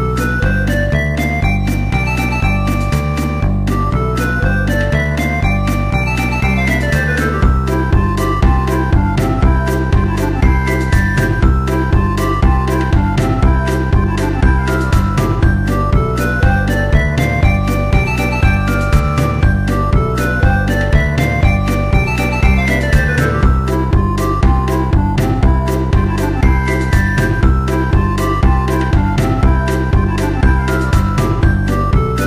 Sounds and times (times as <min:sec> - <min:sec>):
Music: 0:00.0 - 0:32.2.